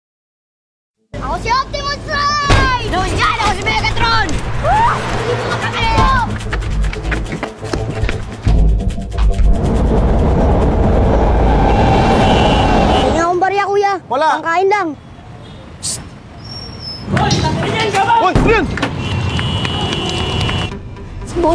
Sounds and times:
Music: 0:04.1 - 0:11.2, 0:19.4 - 0:21.5.

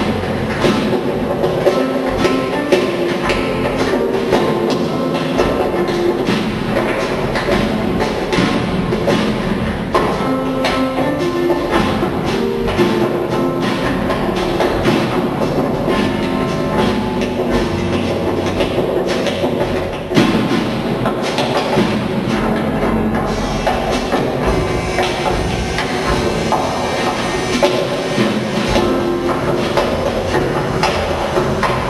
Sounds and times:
Music: 0:00.0 - 0:31.9.

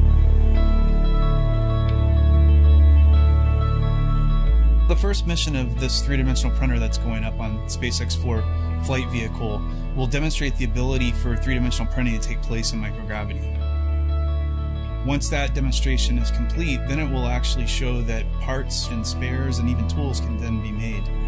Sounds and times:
Music: 0:00.0 - 0:21.2
Speech: 0:04.9 - 0:13.5, 0:15.0 - 0:21.1.

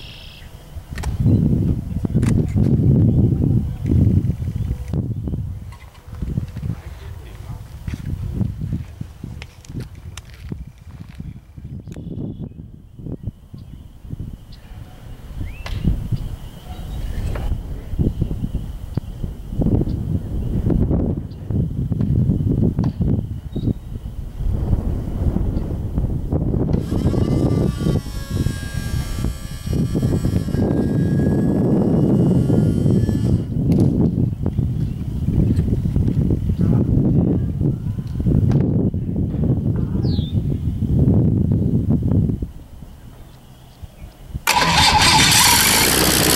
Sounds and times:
Speech: 0:06.6 - 0:07.8, 0:39.8 - 0:40.2.

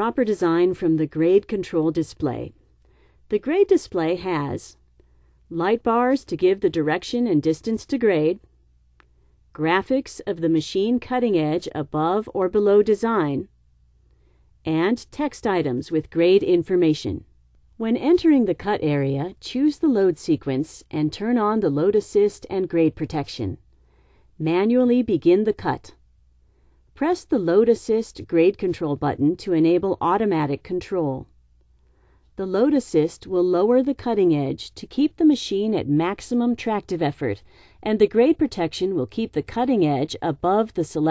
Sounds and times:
Speech: 0:00.0 - 0:02.6, 0:03.3 - 0:04.8, 0:05.5 - 0:08.5, 0:09.6 - 0:13.5, 0:14.7 - 0:23.6, 0:24.4 - 0:26.0, 0:27.0 - 0:31.3, 0:32.4 - 0:41.1.

